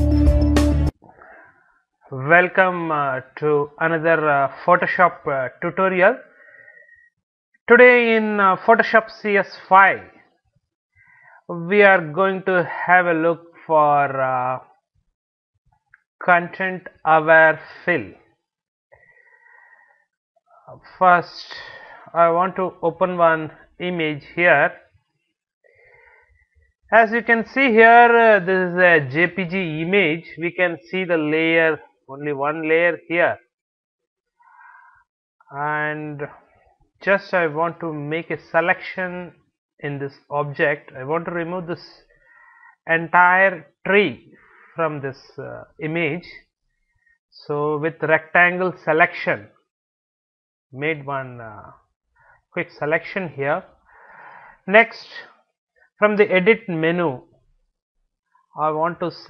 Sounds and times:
Speech: 0:02.2 - 0:06.3, 0:07.7 - 0:10.2, 0:11.4 - 0:14.7, 0:16.2 - 0:18.2, 0:20.6 - 0:24.8, 0:26.9 - 0:33.4, 0:35.5 - 0:42.1, 0:42.9 - 0:46.4, 0:47.4 - 0:49.6, 0:50.8 - 0:51.8, 0:52.6 - 0:53.7, 0:54.7 - 0:55.4, 0:56.0 - 0:57.2, 0:58.6 - 0:59.3.

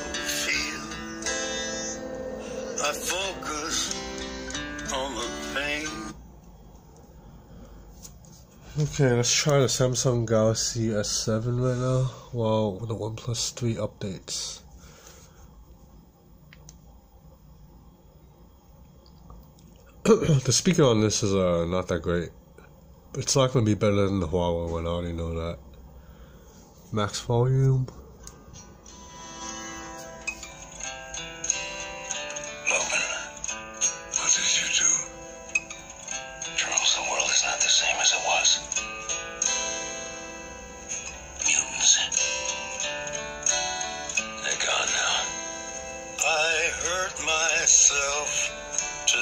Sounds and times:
Speech: 0:08.8 - 0:14.6, 0:20.0 - 0:22.4, 0:23.2 - 0:25.6, 0:26.9 - 0:28.0, 0:34.2 - 0:35.1.

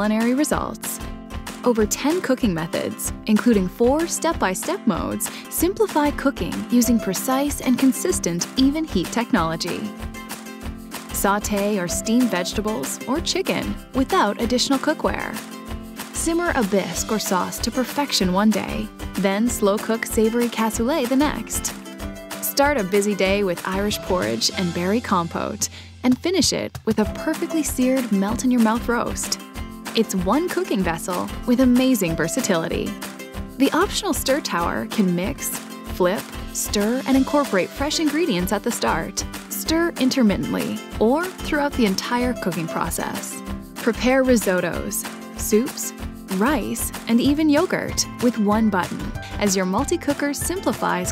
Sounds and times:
Speech: 0:00.0 - 0:01.0, 0:01.6 - 0:09.9, 0:11.1 - 0:15.4, 0:16.2 - 0:21.7, 0:22.4 - 0:29.4, 0:30.0 - 0:33.0, 0:33.6 - 0:51.1
Music: 0:00.0 - 0:51.1.

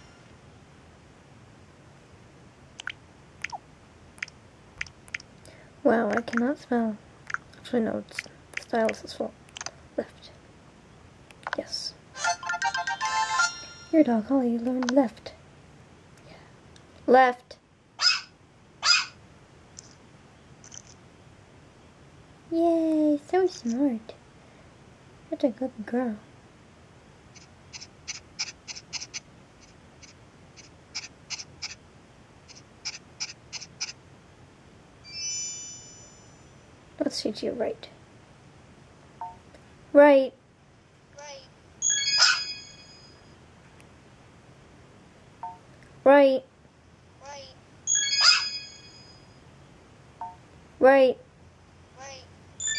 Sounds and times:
Inside, small room: 0:00.0 - 0:52.7
Speech: 0:05.8 - 0:07.0, 0:07.6 - 0:09.4, 0:10.0 - 0:10.4, 0:11.5 - 0:12.0, 0:14.0 - 0:15.4, 0:17.1 - 0:17.6, 0:22.5 - 0:24.2, 0:25.3 - 0:26.3, 0:37.0 - 0:38.0, 0:39.9 - 0:40.4, 0:41.2 - 0:41.5, 0:46.0 - 0:46.5, 0:47.2 - 0:47.6, 0:50.8 - 0:51.3, 0:52.0 - 0:52.3.

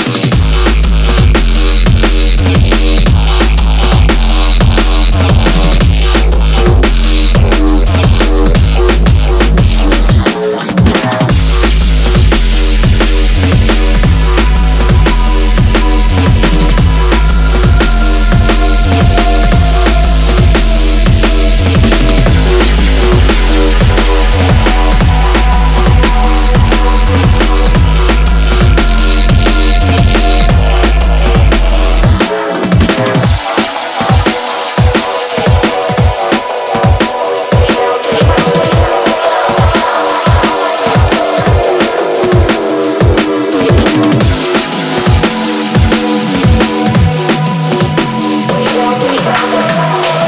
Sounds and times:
Electronic music: 0:00.0 - 0:50.2.

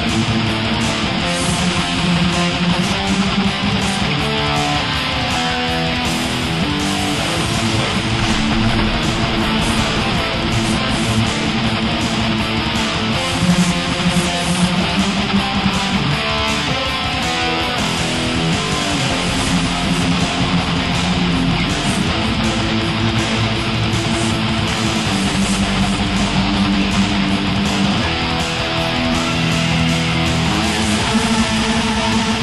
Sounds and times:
Guitar: 0:00.0 - 0:32.4.

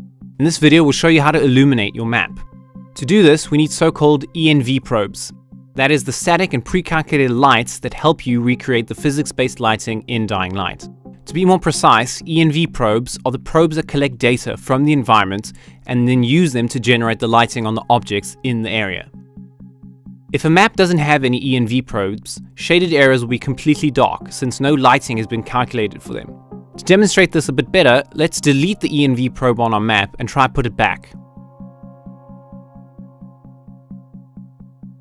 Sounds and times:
Music: 0:00.0 - 0:35.0
Speech: 0:00.4 - 0:19.1, 0:20.4 - 0:31.2.

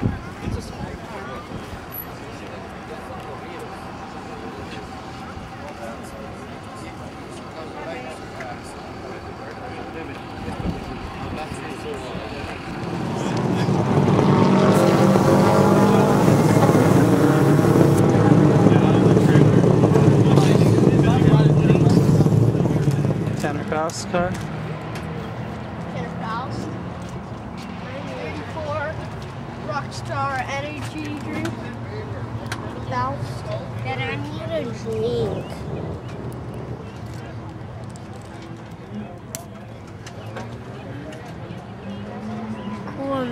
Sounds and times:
Car: 0:00.0 - 0:43.3.

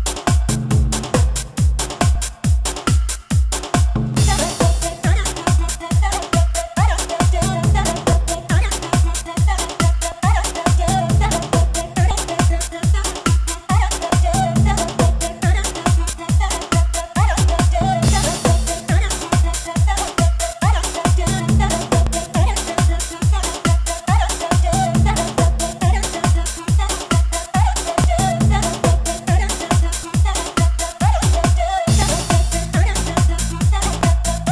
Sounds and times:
Music: 0:00.0 - 0:34.5.

